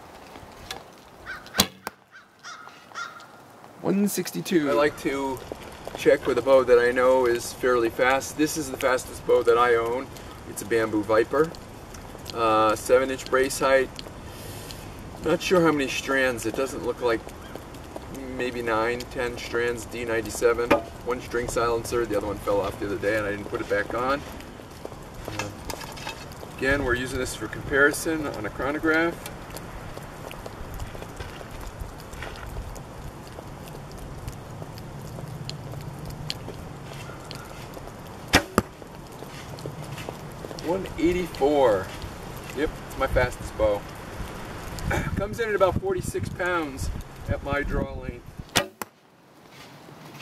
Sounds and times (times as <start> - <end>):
Arrow: 1.6 - 2.0, 38.3 - 38.7, 48.5 - 49.0.